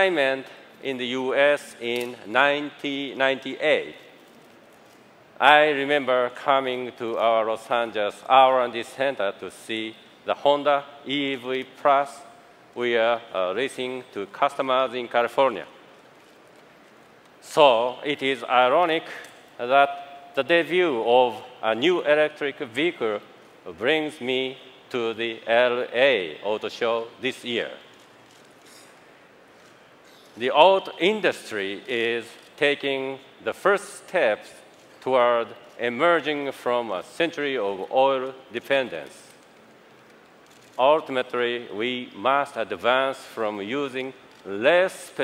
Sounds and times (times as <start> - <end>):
Speech: 0.0 - 4.0, 5.4 - 15.8, 17.4 - 27.8, 30.4 - 39.4, 40.8 - 45.2.